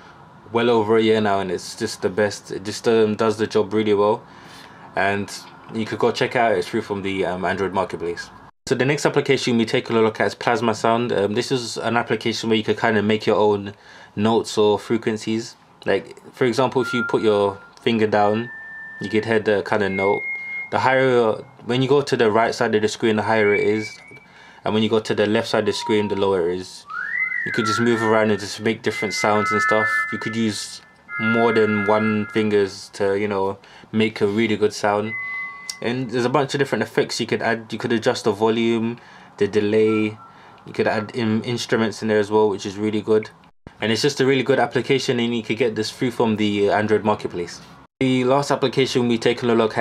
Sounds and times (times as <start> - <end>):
Inside, small room: 0.0 - 49.8
Speech: 0.5 - 4.3, 5.0 - 26.9, 27.5 - 49.8.